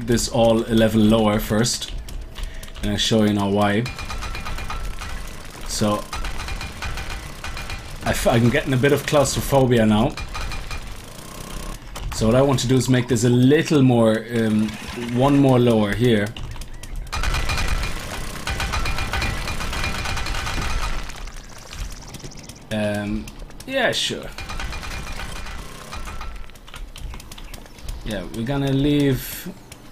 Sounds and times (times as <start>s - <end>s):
Speech: 0.0s - 1.9s, 2.8s - 3.9s, 5.7s - 6.1s, 8.0s - 10.2s, 12.2s - 16.4s, 22.7s - 24.4s, 28.0s - 29.6s
Outside, rural or natural: 0.0s - 29.9s.